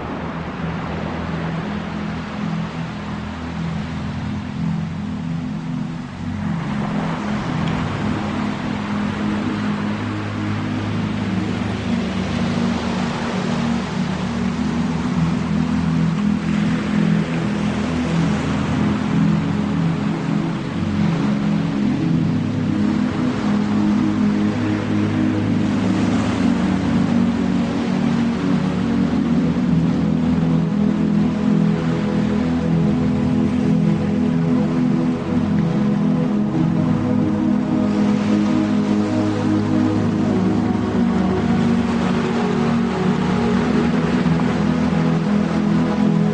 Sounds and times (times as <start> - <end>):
Music: 0.0 - 46.3
White noise: 0.0 - 46.3.